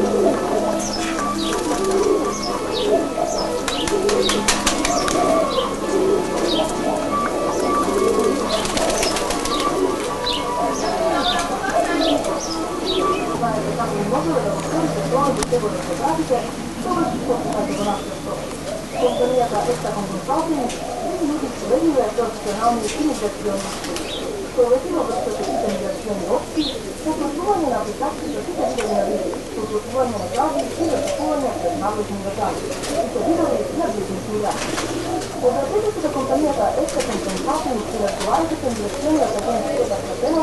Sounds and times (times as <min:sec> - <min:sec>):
Speech: 0:00.0 - 0:09.7, 0:10.3 - 0:34.8, 0:35.4 - 0:40.4
Pigeon, dove: 0:00.0 - 0:40.4.